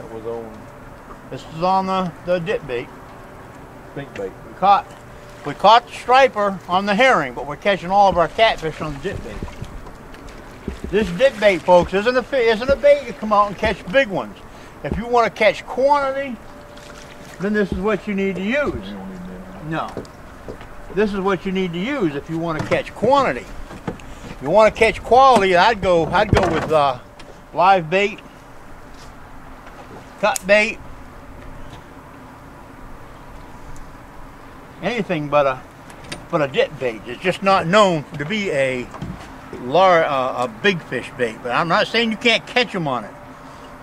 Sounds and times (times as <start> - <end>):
Speech: 0.0 - 0.6, 1.3 - 2.9, 4.0 - 4.9, 5.5 - 9.5, 10.9 - 16.4, 17.4 - 20.0, 20.9 - 23.5, 24.4 - 27.0, 27.6 - 28.2, 30.2 - 30.8, 34.8 - 35.6, 36.3 - 38.9, 39.6 - 43.2
Outside, rural or natural: 0.0 - 43.8.